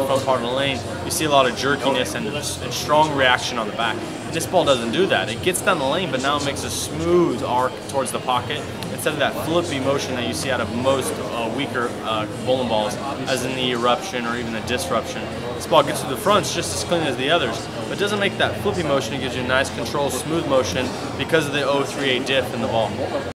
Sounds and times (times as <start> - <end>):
Speech: 0.0 - 23.3.